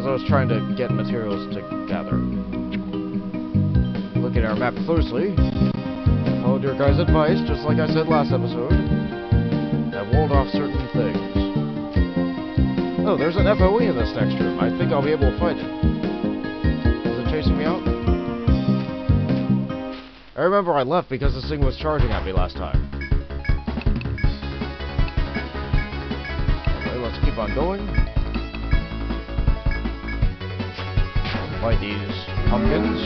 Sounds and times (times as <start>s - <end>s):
Speech: 0.0s - 2.2s, 4.2s - 5.4s, 6.4s - 8.8s, 10.0s - 11.4s, 13.0s - 15.7s, 17.1s - 17.8s, 20.4s - 22.8s, 26.8s - 27.9s, 31.5s - 33.0s
Music: 0.0s - 20.1s, 21.2s - 33.0s.